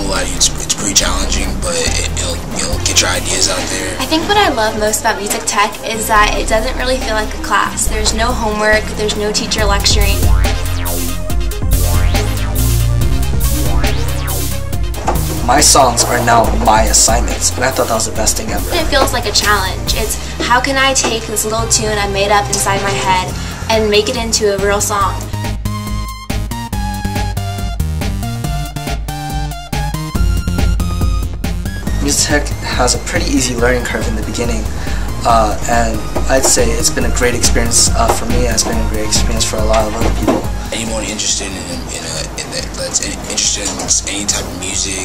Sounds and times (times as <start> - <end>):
Exciting music: 0.0 - 41.4
Speech: 15.5 - 25.2, 35.3 - 45.0.